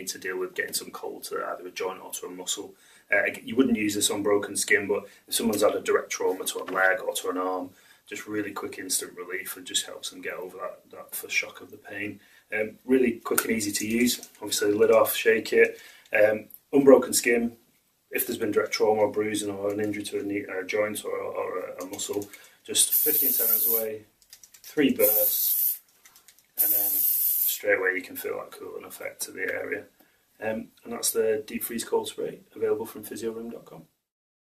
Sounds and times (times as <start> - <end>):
Speech: 0.0 - 24.1, 24.7 - 25.7, 26.6 - 34.0
Spray: 22.9 - 23.8, 25.0 - 25.8, 26.6 - 27.6.